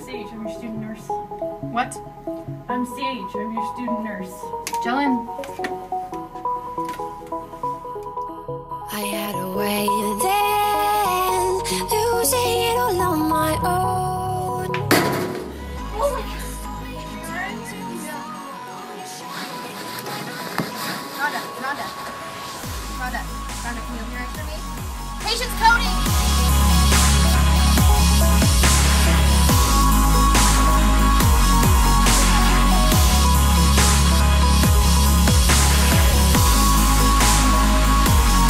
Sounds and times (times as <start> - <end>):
Speech: 0.0 - 1.1, 2.7 - 5.3, 21.2 - 22.0, 22.9 - 24.6
Music: 0.0 - 38.4.